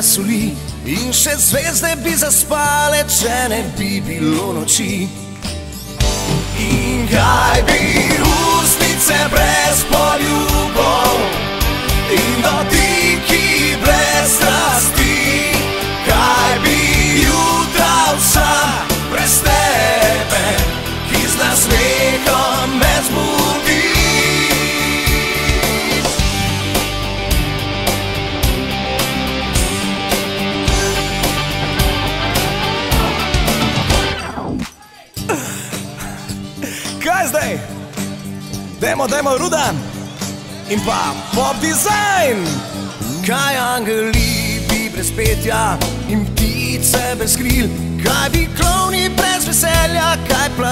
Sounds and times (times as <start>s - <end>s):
Music: 0.0s - 50.7s.